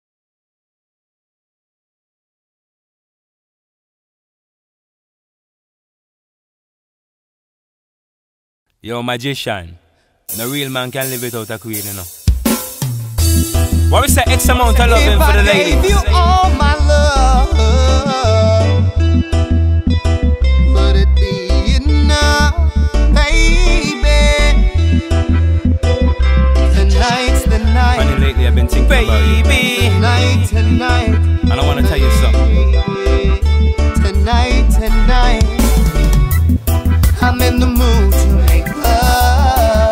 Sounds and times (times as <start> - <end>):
Speech: 8.8 - 12.1, 13.9 - 16.6, 28.0 - 30.0, 31.5 - 32.6
Music: 10.3 - 39.9.